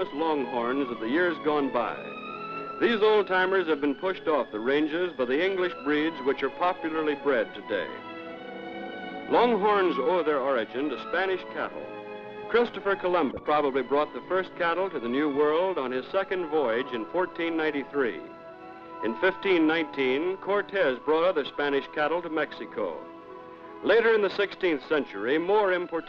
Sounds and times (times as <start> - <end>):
Speech: 0.0 - 2.0, 2.8 - 7.9, 9.3 - 11.8, 12.5 - 18.2, 19.0 - 23.0, 23.8 - 26.0
Music: 0.0 - 26.0.